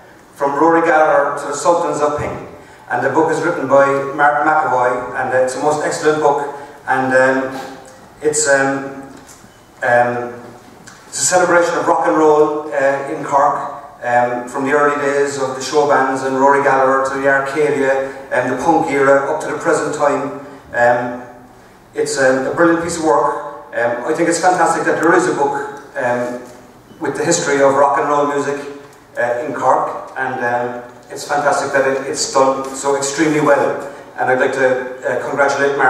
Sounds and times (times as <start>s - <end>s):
Speech: 0.4s - 9.1s, 9.8s - 35.8s.